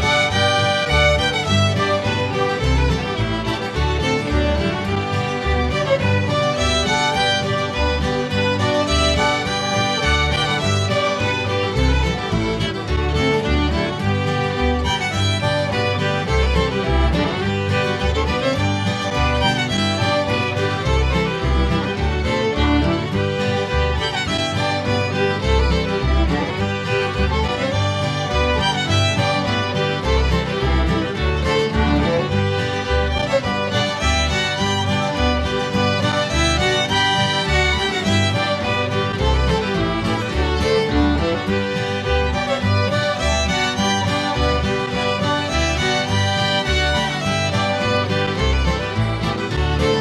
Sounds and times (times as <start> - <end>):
Music: 0.0 - 50.0.